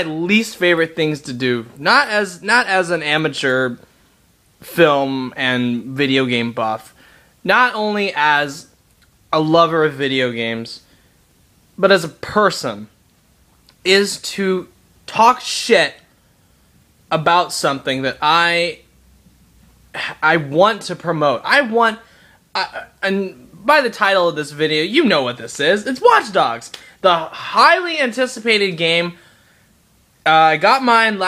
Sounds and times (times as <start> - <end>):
Speech: 0.0 - 3.9, 4.6 - 10.9, 11.8 - 13.0, 13.8 - 16.1, 17.1 - 18.9, 20.0 - 29.2, 30.2 - 31.2.